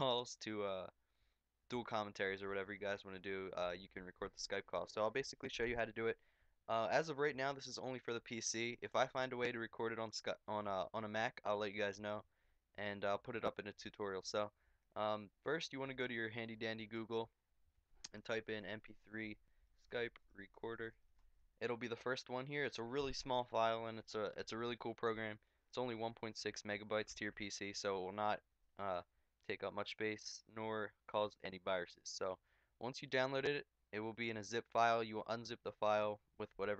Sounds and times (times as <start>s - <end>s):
Speech: 0.0s - 1.0s, 1.7s - 17.4s, 18.1s - 21.0s, 21.6s - 36.7s.